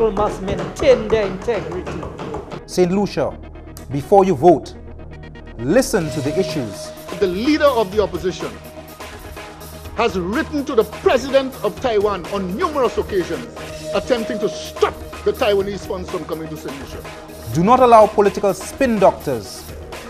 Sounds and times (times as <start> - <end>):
Speech: 0.0 - 2.1, 2.7 - 4.7, 5.6 - 8.6, 10.0 - 19.6
Music: 0.0 - 20.1.